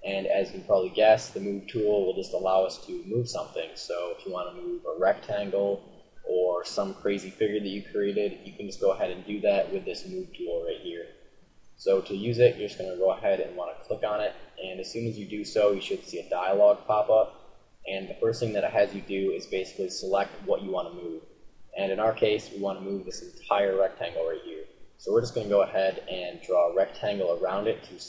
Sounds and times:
Speech: 0.0 - 11.1, 11.8 - 17.3, 17.9 - 21.2, 21.8 - 28.0.

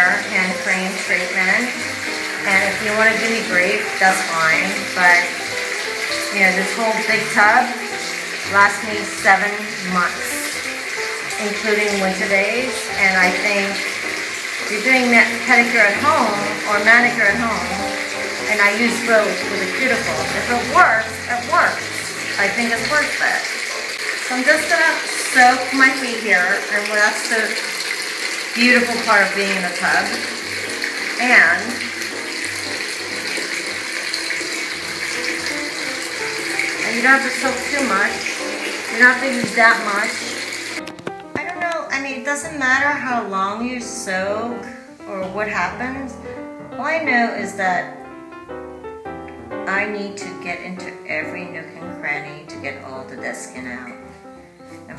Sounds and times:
Speech: 0.0 - 1.8, 2.4 - 5.3, 6.3 - 7.8, 8.5 - 10.6, 11.4 - 13.8, 14.7 - 17.8, 18.5 - 23.4, 24.3 - 27.6, 28.6 - 30.2, 31.2 - 31.8, 36.8 - 38.2, 38.9 - 40.2, 41.4 - 48.0, 49.7 - 54.0
Bathtub (filling or washing): 0.0 - 54.9
Music: 0.0 - 54.9.

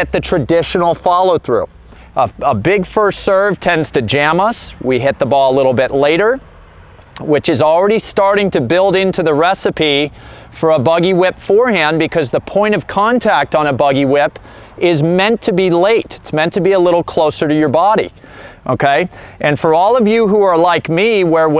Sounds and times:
Speech: 0.0 - 6.4, 7.2 - 21.5.

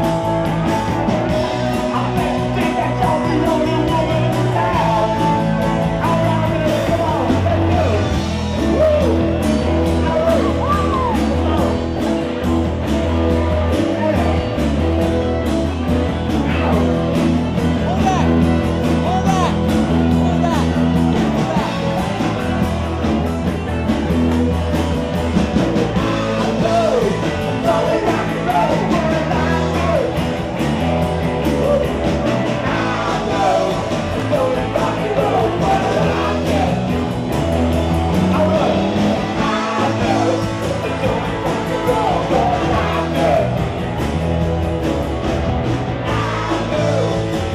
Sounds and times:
Rock and roll: 0.0 - 47.5
Speech: 17.8 - 22.0.

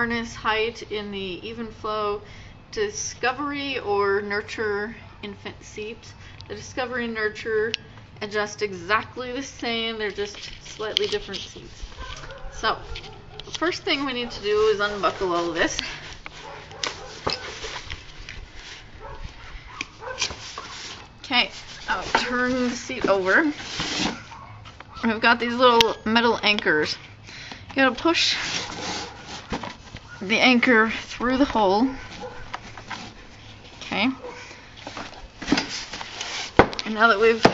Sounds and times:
Speech: 12.6 - 12.8, 13.6 - 16.0, 21.3 - 23.6, 27.8 - 28.4, 30.2 - 32.0, 33.8 - 34.2, 36.9 - 37.5.

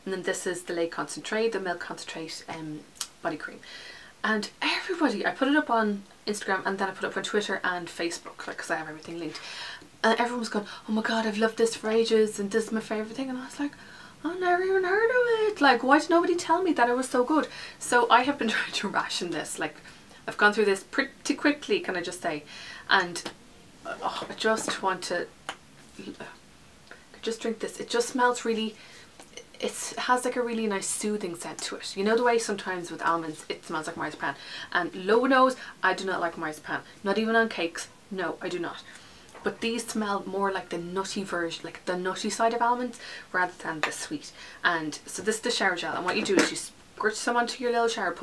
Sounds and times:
Speech: 0.0 - 3.6, 4.2 - 9.4, 10.0 - 23.3, 23.9 - 25.3, 26.0 - 26.4, 27.2 - 28.8, 29.4 - 48.2
Inside, small room: 0.0 - 48.2.

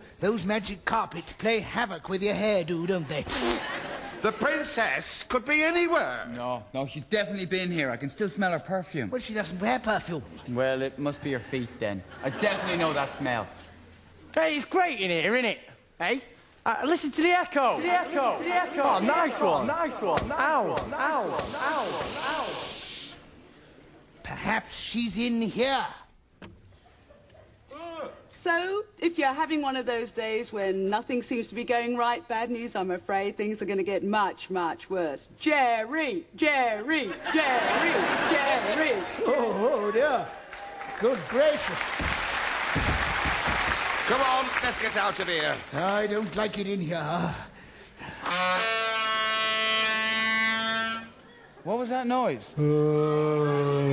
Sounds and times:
Inside, large room or hall: 0.0 - 53.9.

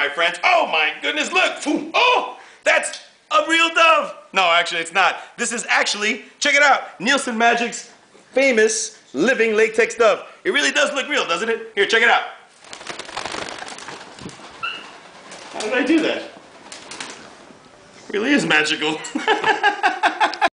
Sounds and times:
Speech: 0.0 - 12.5, 15.6 - 16.4, 18.1 - 19.2
Bird: 14.6 - 15.1.

